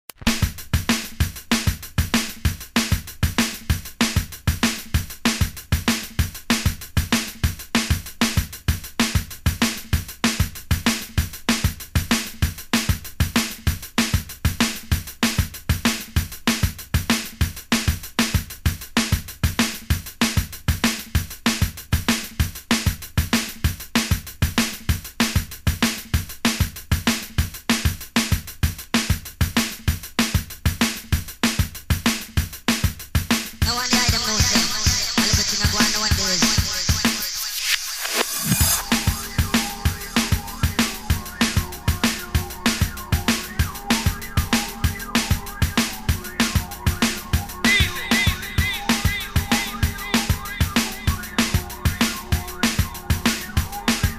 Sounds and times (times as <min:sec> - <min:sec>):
Music: 0:00.1 - 0:54.1.